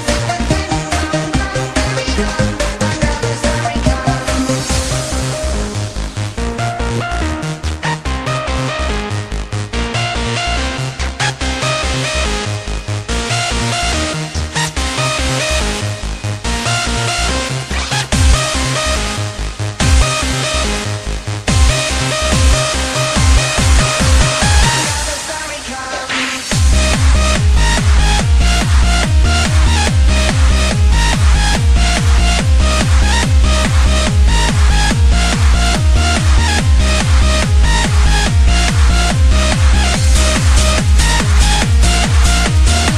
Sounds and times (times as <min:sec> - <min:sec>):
Background music: 0:00.0 - 0:42.9.